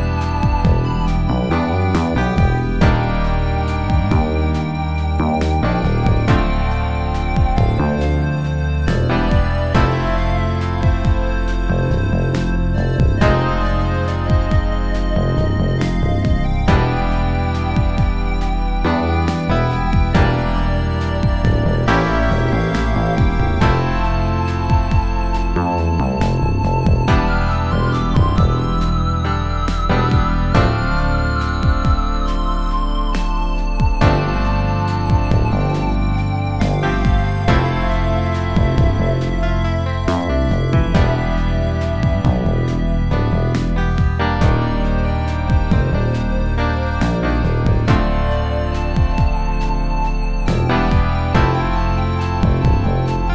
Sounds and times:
Video game music: 0.0 - 53.3.

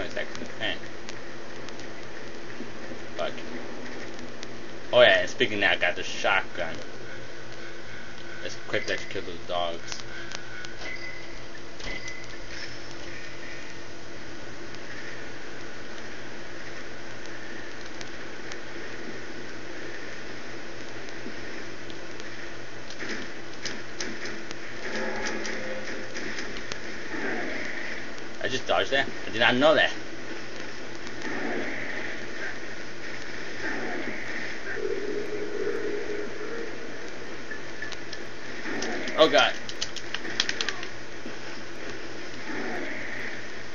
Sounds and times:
Speech: 4.9 - 6.8, 8.4 - 10.0, 28.4 - 30.0, 39.2 - 39.6.

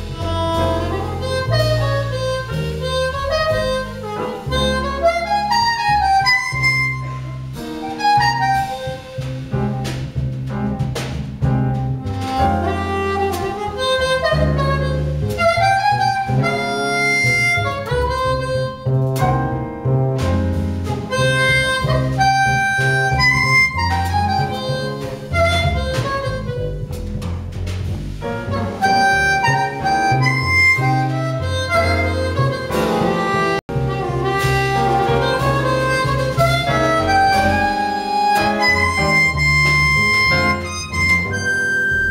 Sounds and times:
Wind instrument, woodwind instrument: 0.0 - 42.1
Harmonica: 0.2 - 9.0, 12.6 - 18.8, 21.0 - 26.8, 28.6 - 42.1.

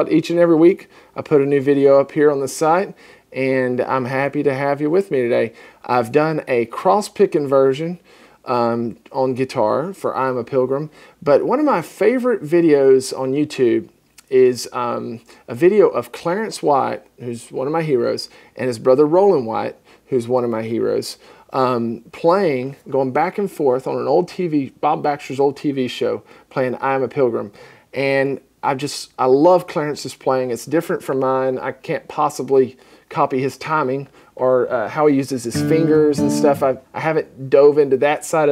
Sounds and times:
Speech: 0.0 - 38.5.

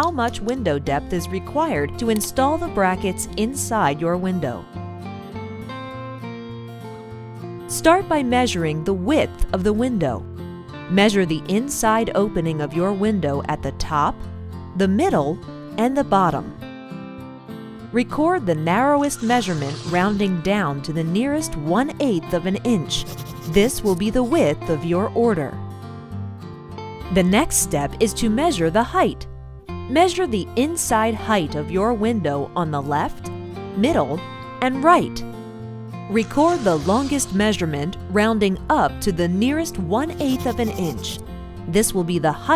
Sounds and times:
Speech: 0.0 - 4.6, 7.7 - 10.2, 10.9 - 14.2, 14.8 - 16.6, 18.0 - 25.6, 27.1 - 29.2, 29.9 - 33.2, 33.8 - 35.2, 36.1 - 42.5
Music: 0.0 - 42.5.

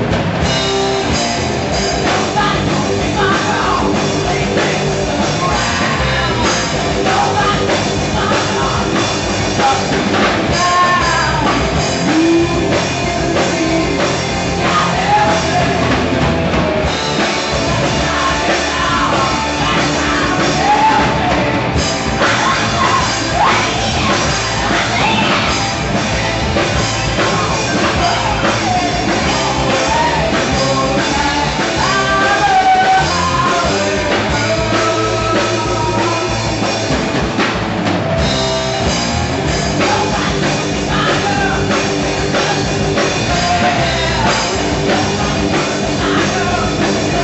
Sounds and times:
Progressive rock: 0.0 - 47.2
Punk rock: 0.0 - 47.2
Rock and roll: 0.0 - 47.2.

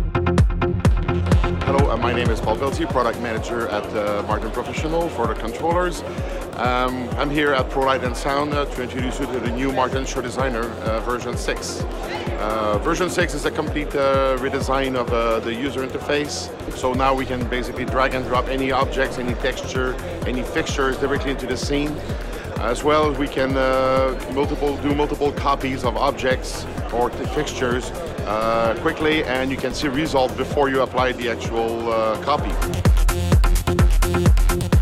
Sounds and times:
Music: 0.0 - 34.8
Speech: 1.6 - 32.6.

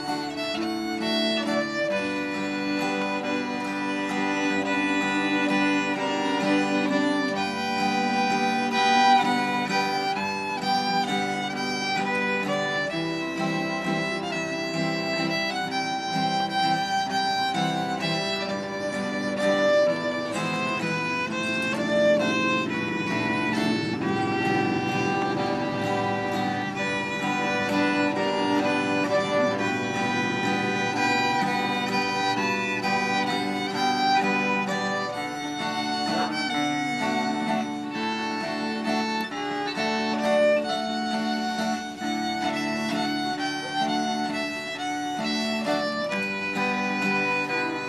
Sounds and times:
Violin, fiddle: 0.0 - 47.8.

